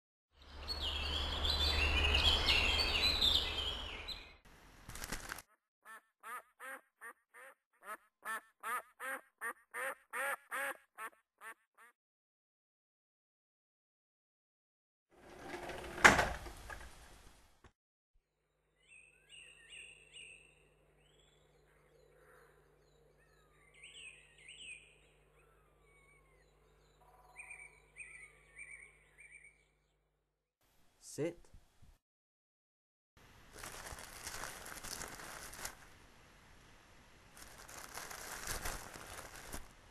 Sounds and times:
Bird vocalization, bird call, bird song: 0.3 - 4.4, 18.5 - 30.2
Outside, rural or natural: 0.3 - 11.9, 18.2 - 32.0, 33.2 - 39.9.

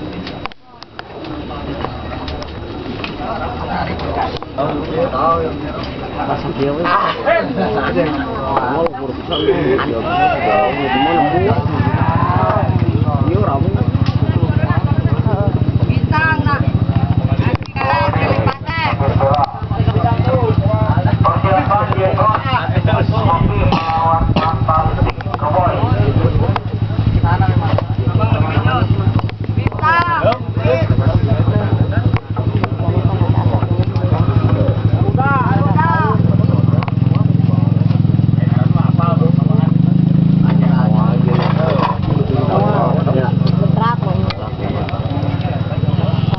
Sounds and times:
Speech: 0.0 - 46.3.

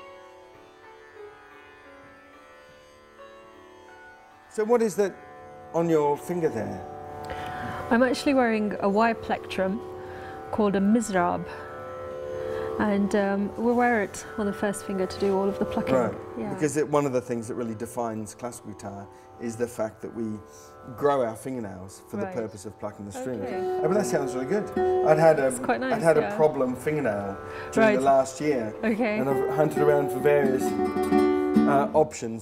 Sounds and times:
Music: 0.0 - 32.4
Speech: 14.9 - 27.2, 27.8 - 30.8, 31.7 - 32.4.

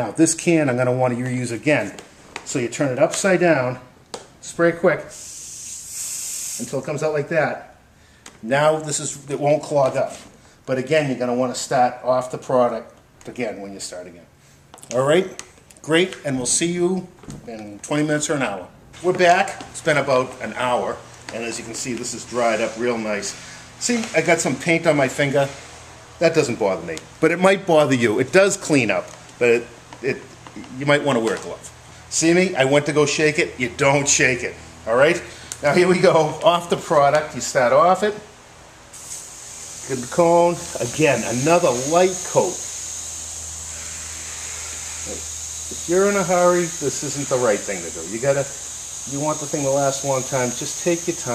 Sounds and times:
Speech: 0.0 - 5.1, 6.6 - 7.7, 8.4 - 14.3, 14.9 - 25.6, 26.2 - 38.3, 39.9 - 42.6, 45.9 - 51.3
Spray: 5.1 - 6.8, 22.2 - 24.1, 38.9 - 51.3.

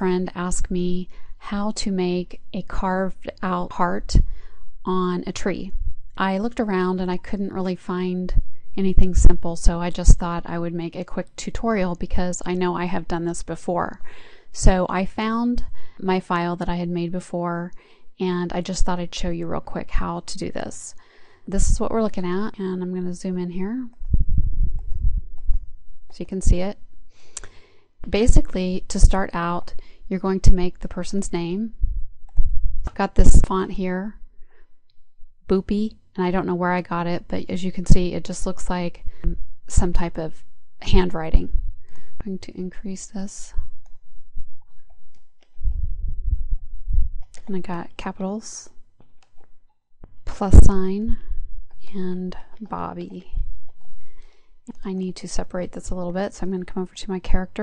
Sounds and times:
Speech: 0.0 - 4.2, 4.9 - 14.0, 14.6 - 24.0, 26.1 - 26.8, 28.0 - 31.7, 32.9 - 34.2, 35.5 - 41.5, 42.2 - 43.6, 47.4 - 48.7, 50.3 - 51.2, 51.8 - 53.4, 54.7 - 57.6.

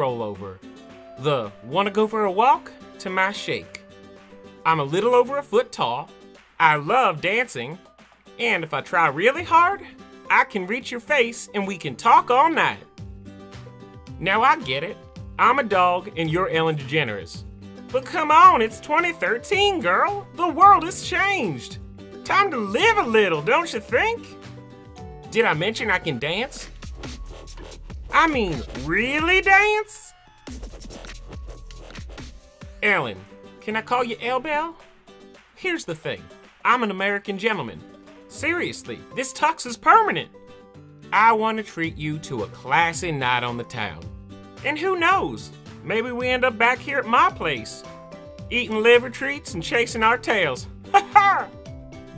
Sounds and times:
Speech: 0.0 - 0.6, 1.2 - 3.8, 4.6 - 7.8, 8.4 - 12.8, 14.2 - 24.3, 25.3 - 26.7, 28.1 - 30.2, 32.8 - 34.8, 35.6 - 40.3, 41.2 - 44.0, 44.6 - 47.8, 48.5 - 51.5
Music: 0.0 - 52.1.

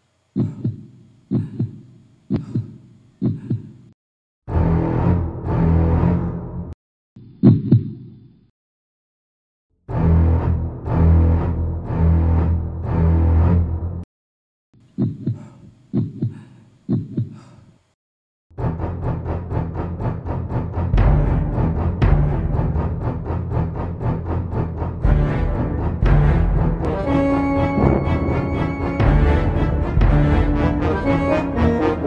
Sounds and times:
Music: 4.5 - 6.8, 9.9 - 14.0, 18.6 - 32.0.

